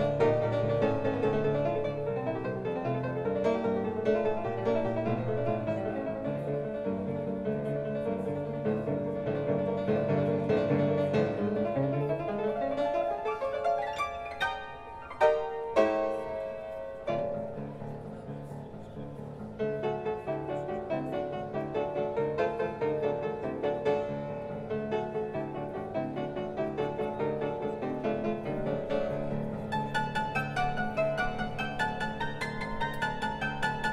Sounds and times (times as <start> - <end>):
Music: 0.0 - 33.9.